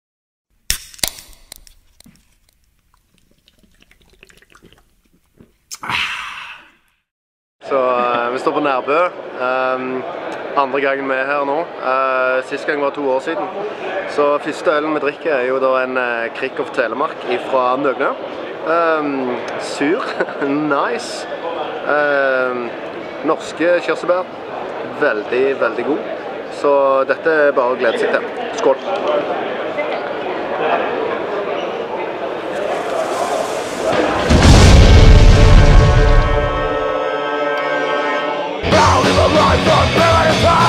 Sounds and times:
Chewing, mastication: 0:01.0 - 0:05.8
Speech: 0:07.6 - 0:32.3.

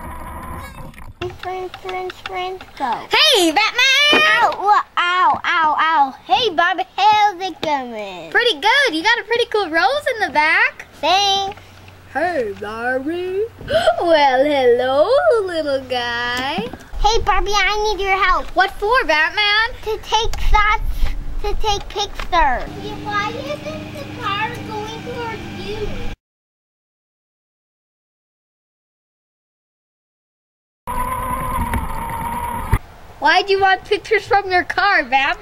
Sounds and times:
Speech: 0:21.4 - 0:26.1, 0:33.2 - 0:35.4.

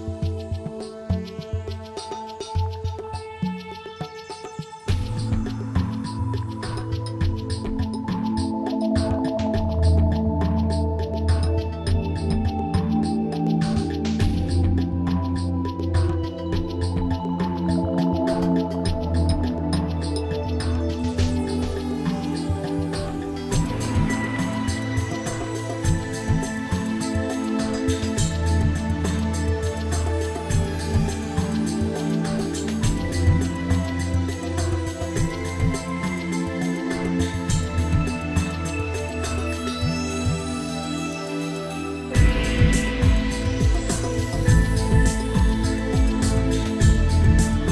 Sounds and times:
Tender music: 0:00.0 - 0:47.7.

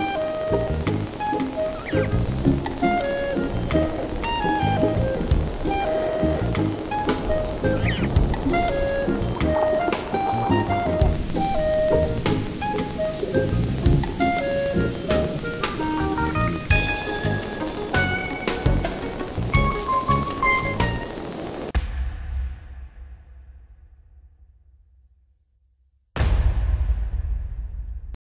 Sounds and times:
Music: 0:00.0 - 0:21.9.

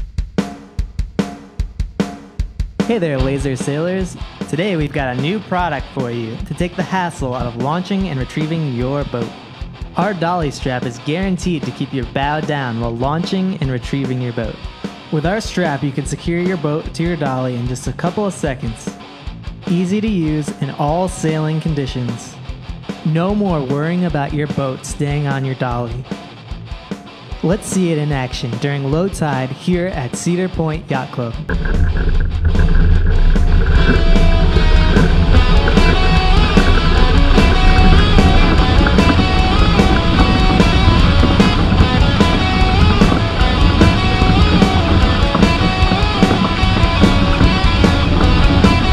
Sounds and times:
Music: 0:00.0 - 0:48.9
Speech: 0:02.9 - 0:19.0, 0:19.7 - 0:22.4, 0:23.0 - 0:26.1, 0:27.4 - 0:31.5
Sailboat, sailing ship: 0:31.5 - 0:48.9.

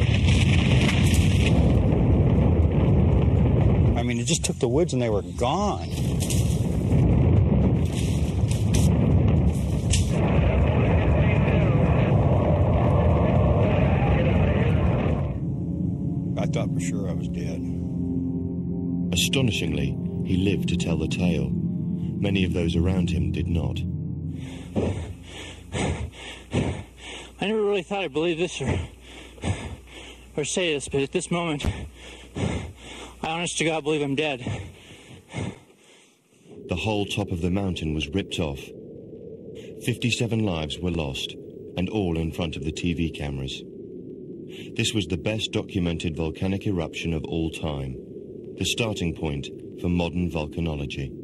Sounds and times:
Eruption: 0:00.0 - 0:16.6, 0:24.4 - 0:51.2
Speech: 0:04.0 - 0:06.0, 0:16.4 - 0:17.7, 0:19.1 - 0:21.6, 0:22.2 - 0:23.9, 0:27.4 - 0:28.9, 0:30.4 - 0:31.8, 0:33.2 - 0:34.6, 0:36.7 - 0:38.7, 0:39.8 - 0:43.6, 0:44.7 - 0:48.0, 0:48.6 - 0:51.2.

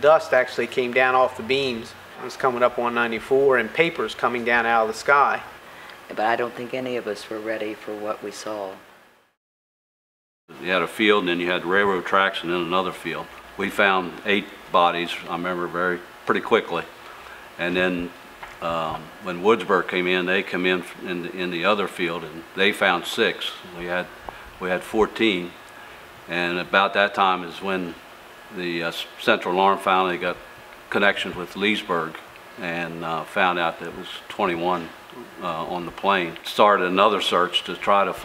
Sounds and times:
Speech: 0:00.0 - 0:05.5, 0:06.1 - 0:08.8, 0:10.5 - 0:16.9, 0:17.6 - 0:25.6, 0:26.3 - 0:38.2.

